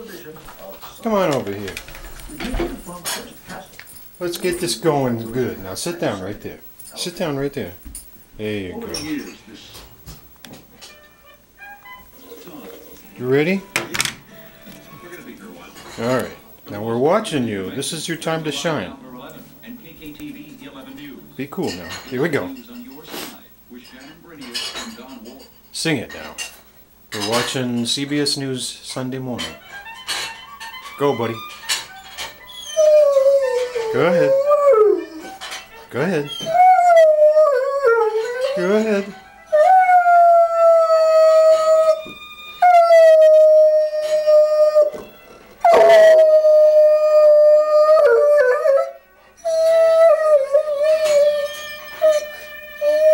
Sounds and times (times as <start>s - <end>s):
Music: 0.0s - 25.3s, 27.4s - 53.1s
Howl: 32.5s - 35.4s, 36.3s - 53.1s.